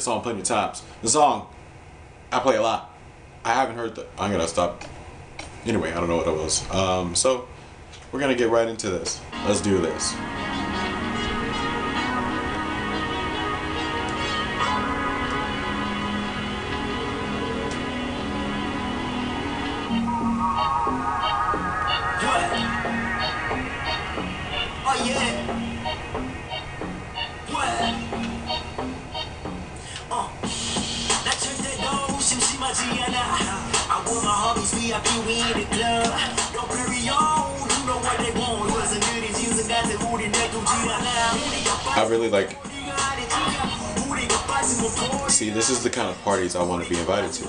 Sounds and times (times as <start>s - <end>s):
Speech: 0.0s - 1.5s, 2.3s - 4.8s, 5.6s - 7.5s, 8.1s - 10.2s, 42.0s - 42.6s, 45.3s - 47.4s
Music: 9.3s - 47.4s.